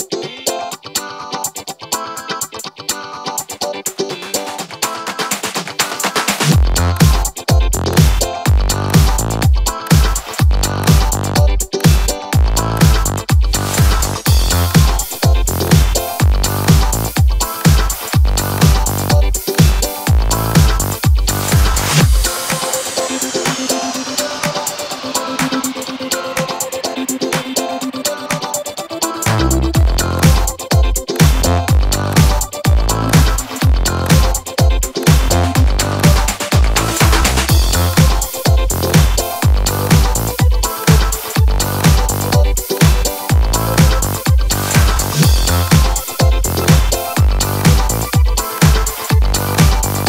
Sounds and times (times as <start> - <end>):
Music: 0.0 - 50.0.